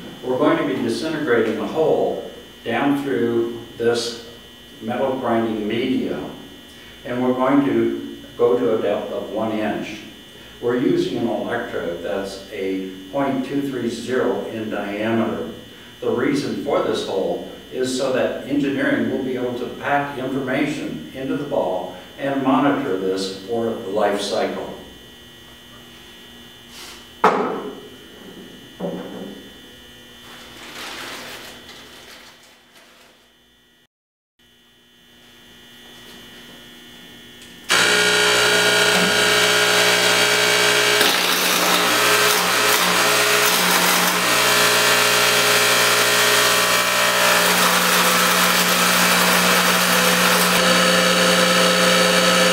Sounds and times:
Speech: 0.2s - 6.4s, 7.0s - 24.9s.

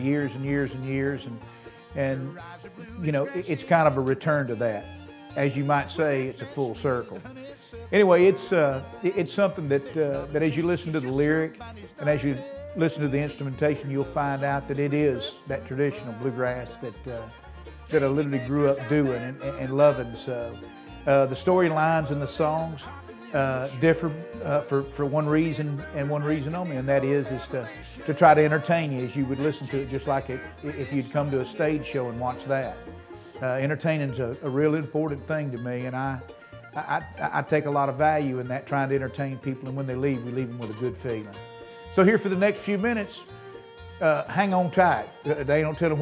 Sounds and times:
Speech: 0.0s - 1.4s, 2.0s - 17.3s, 17.9s - 32.8s, 33.4s - 36.2s, 36.8s - 41.4s, 42.0s - 43.3s, 44.0s - 46.0s
Bluegrass: 0.0s - 46.0s.

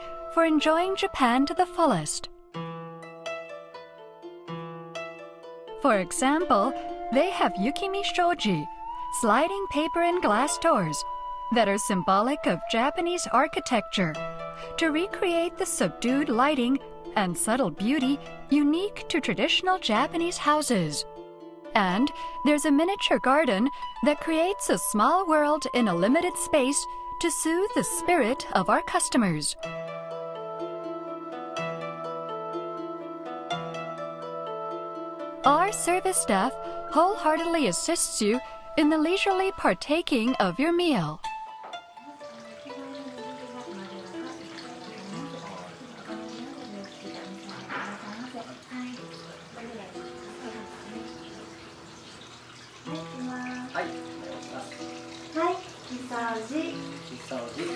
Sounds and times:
Music: 0.0s - 57.7s
Speech: 0.4s - 2.3s, 5.8s - 14.2s, 14.8s - 21.0s, 21.8s - 29.6s, 35.5s - 41.2s, 55.4s - 57.7s.

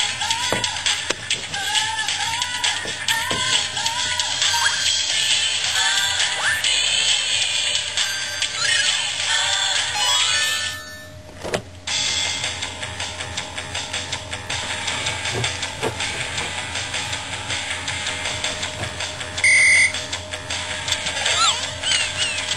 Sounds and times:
Music: 0.0s - 11.3s, 11.9s - 22.5s.

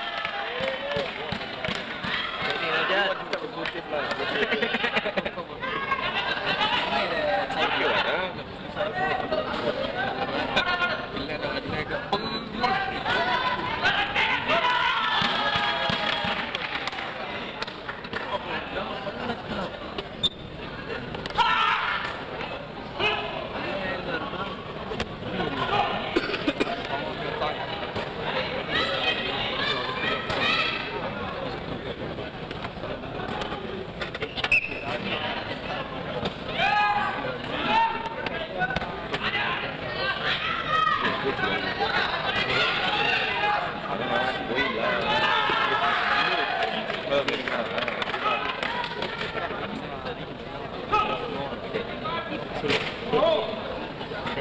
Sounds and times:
Inside, large room or hall: 0.0s - 54.4s.

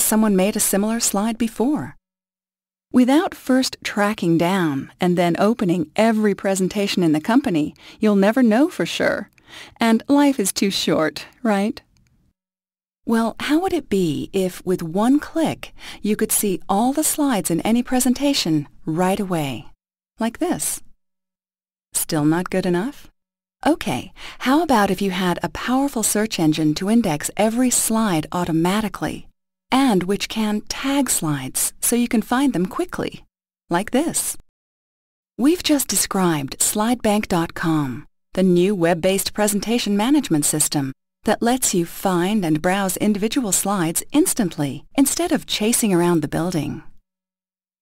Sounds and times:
Speech: 0.0s - 2.0s, 3.0s - 11.8s, 13.1s - 20.9s, 22.0s - 34.4s, 35.4s - 46.9s.

